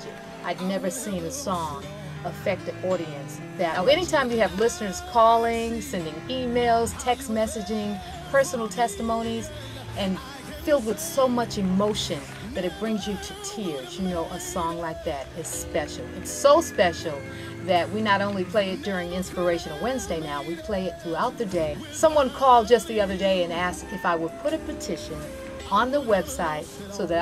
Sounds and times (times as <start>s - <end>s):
Music: 0.0s - 27.2s
Speech: 0.0s - 27.2s.